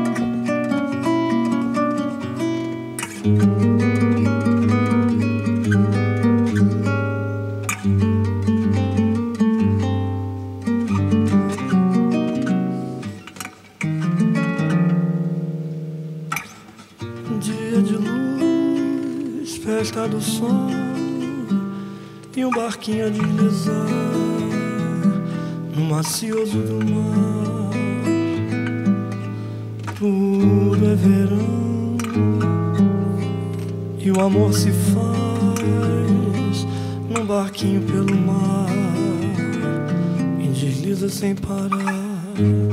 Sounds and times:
Acoustic guitar: 0.0 - 42.7
Strum: 0.0 - 42.7.

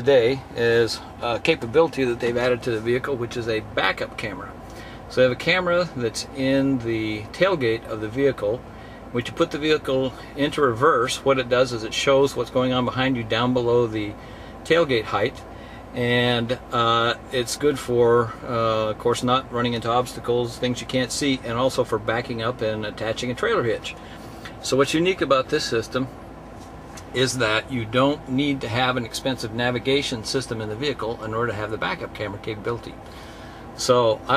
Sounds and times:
Speech: 0.0 - 15.4, 16.0 - 24.0, 24.6 - 26.2, 27.1 - 33.0, 33.8 - 34.3.

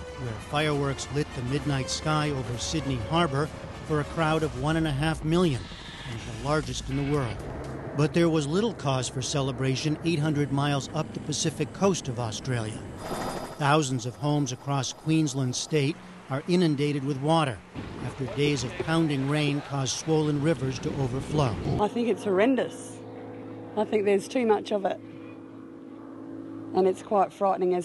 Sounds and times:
Speech: 0.2 - 7.4, 13.6 - 22.8, 23.8 - 25.0, 26.8 - 27.8.

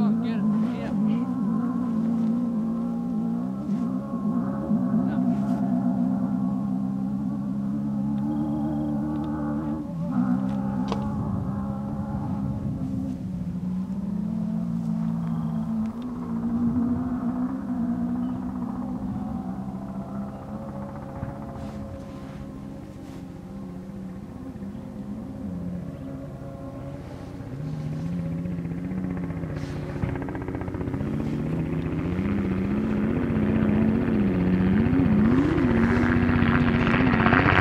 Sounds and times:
Car: 0.0 - 37.6.

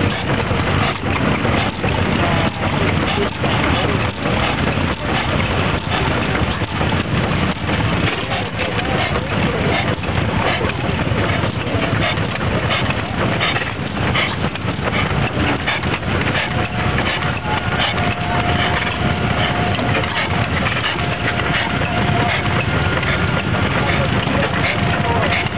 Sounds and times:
Medium engine (mid frequency): 0.0 - 25.5
Speech: 0.0 - 25.5.

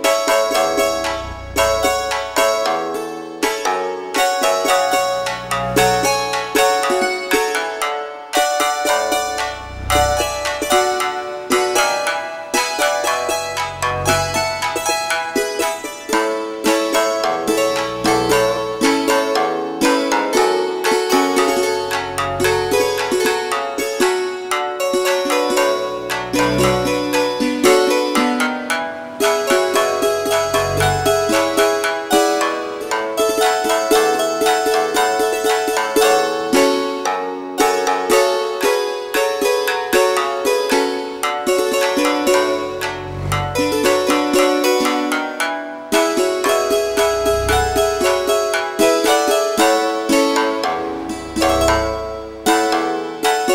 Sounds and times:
Music: 0.0 - 53.5.

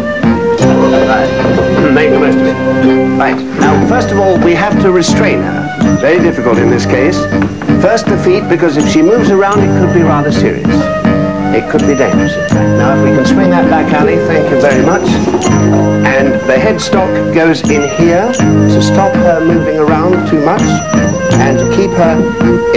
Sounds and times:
Music: 0.0 - 22.7
Speech: 0.8 - 10.8, 11.6 - 15.3, 16.0 - 22.7.

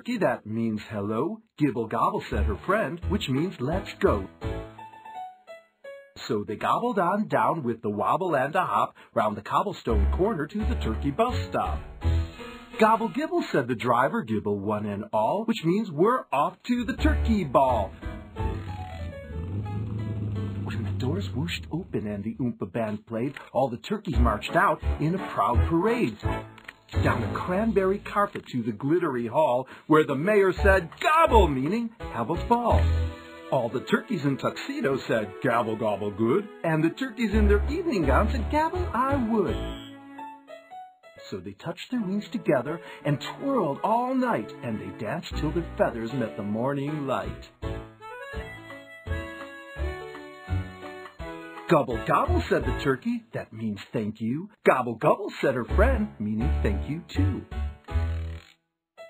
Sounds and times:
Speech: 0.0 - 4.3, 6.2 - 11.9, 12.8 - 17.9, 20.6 - 26.3, 27.0 - 32.9, 33.5 - 39.6, 41.2 - 47.5, 51.7 - 57.5
Music: 2.1 - 7.4, 9.8 - 14.0, 16.4 - 22.0, 23.9 - 29.1, 29.9 - 53.2, 55.5 - 59.0.

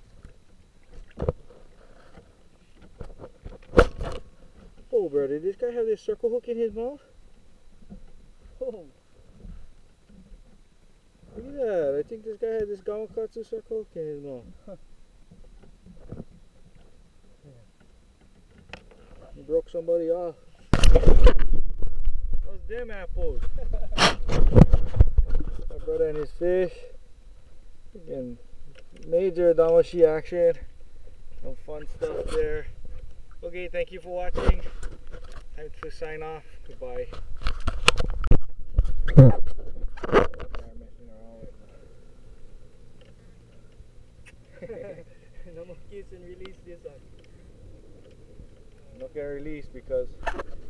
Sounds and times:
Speech: 4.9 - 7.1, 11.3 - 14.8, 22.4 - 23.4, 25.7 - 27.0, 35.6 - 37.1, 45.4 - 47.0, 48.9 - 50.2.

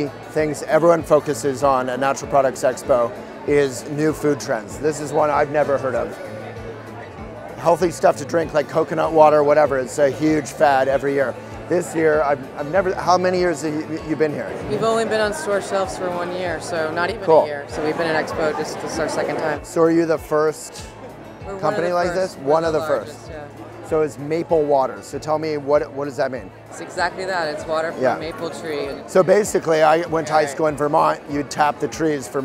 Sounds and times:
Music: 0.0 - 32.4.

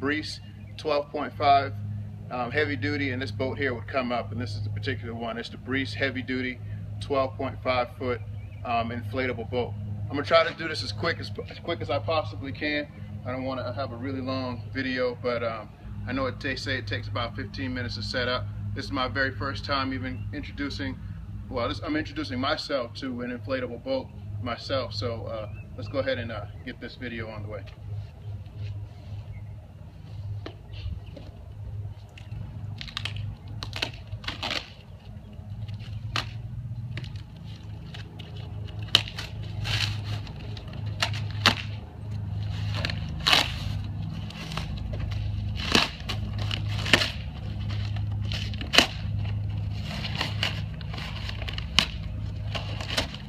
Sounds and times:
Speech: 0.0 - 27.7.

